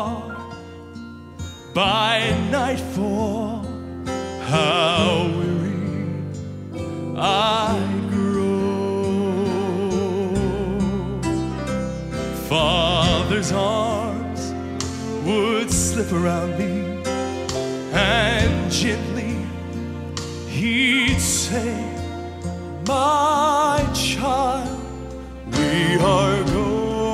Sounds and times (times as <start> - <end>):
Music: 0.0 - 27.1.